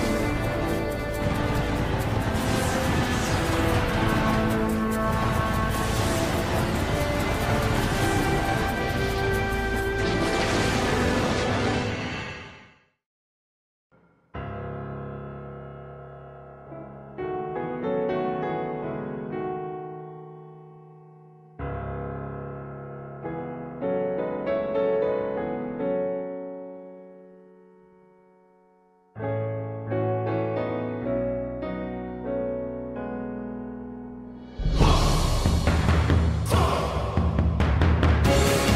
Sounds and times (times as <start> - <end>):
Piano: 0.0 - 12.6, 14.0 - 38.7.